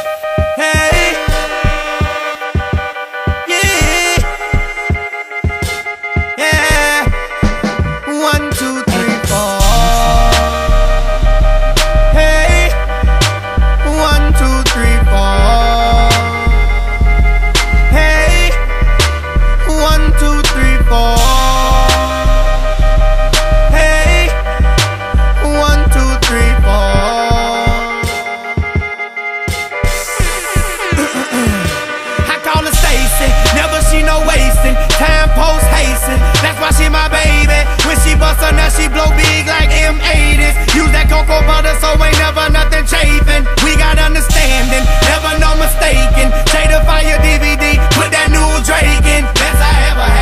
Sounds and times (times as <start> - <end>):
Music: 0.0 - 50.2.